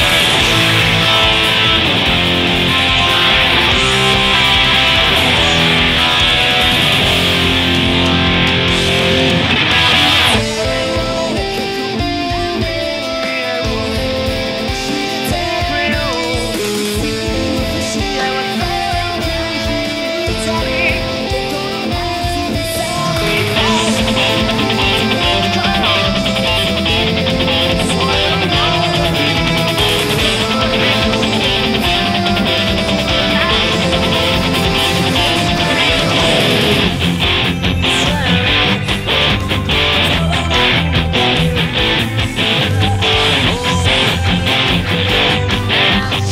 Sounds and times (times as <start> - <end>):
Electric guitar: 0.0 - 46.3.